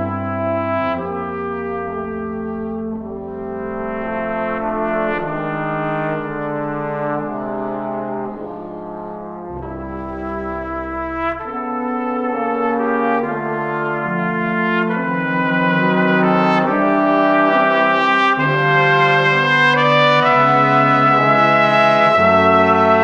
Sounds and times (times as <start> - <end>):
French horn: 0.0 - 23.0
Trombone: 0.0 - 23.0.